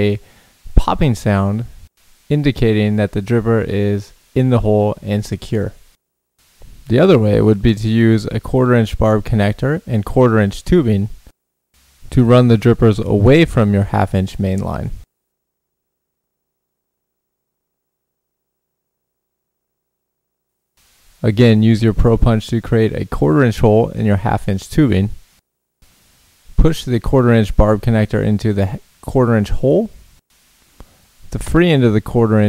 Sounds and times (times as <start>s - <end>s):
Speech: 0.0s - 5.8s, 6.9s - 11.2s, 12.1s - 15.1s, 21.2s - 25.2s, 26.6s - 30.0s, 31.3s - 32.4s.